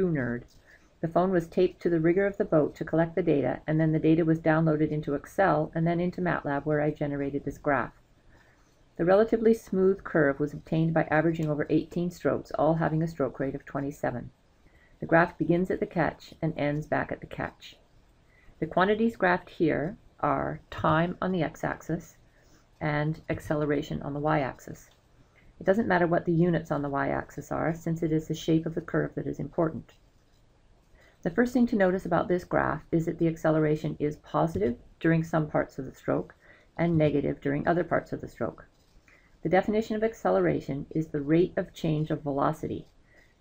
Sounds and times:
Speech: 0.0s - 7.9s, 9.0s - 14.3s, 15.0s - 17.8s, 18.6s - 22.2s, 22.8s - 24.9s, 25.6s - 29.9s, 31.2s - 38.7s, 39.4s - 42.9s.

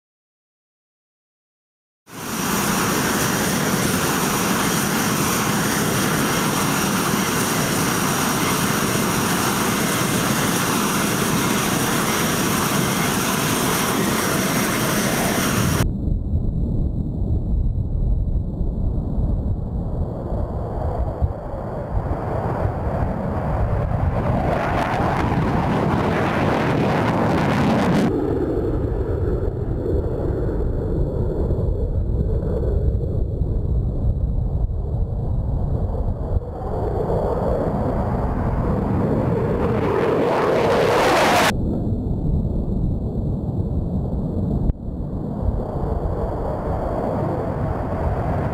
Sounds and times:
Fixed-wing aircraft, airplane: 2.1s - 48.5s.

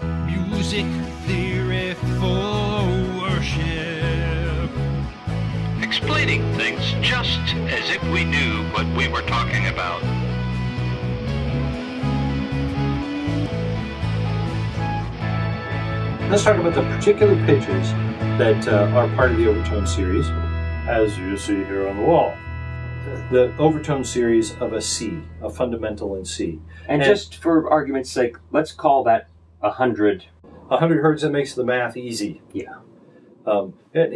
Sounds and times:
Music: 0.0s - 27.2s
Speech: 0.3s - 4.7s, 5.8s - 10.1s, 16.3s - 22.4s, 23.1s - 32.8s, 33.5s - 34.1s
Harmonic: 2.3s - 28.6s.

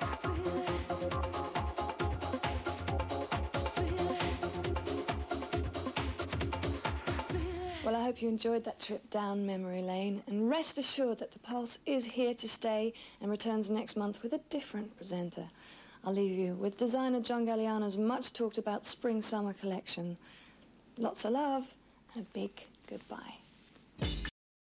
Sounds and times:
Speech: 7.7s - 20.2s, 21.0s - 23.4s.

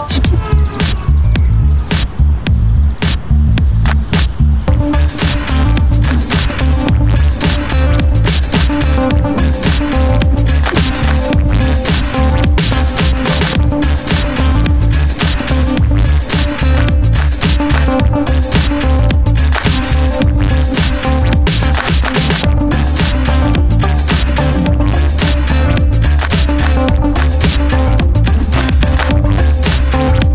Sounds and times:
Drum and bass: 0.0s - 30.3s.

